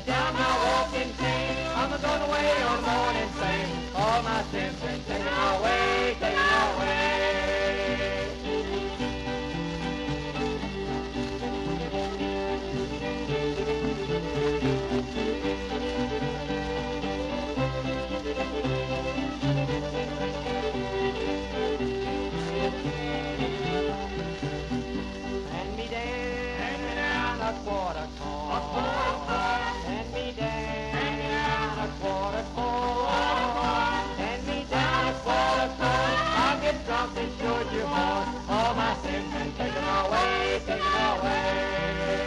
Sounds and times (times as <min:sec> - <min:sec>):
Country: 0:00.0 - 0:42.2.